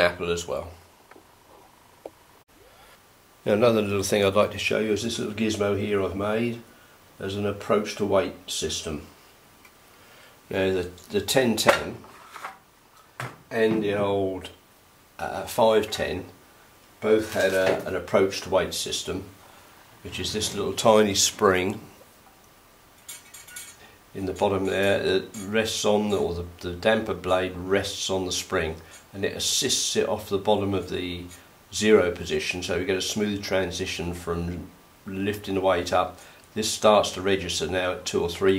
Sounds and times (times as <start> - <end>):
Speech: 0.0 - 0.8, 3.4 - 9.2, 10.5 - 12.1, 13.5 - 14.6, 15.2 - 16.4, 17.0 - 19.4, 20.0 - 22.0, 24.2 - 38.5
Inside, small room: 0.0 - 38.5.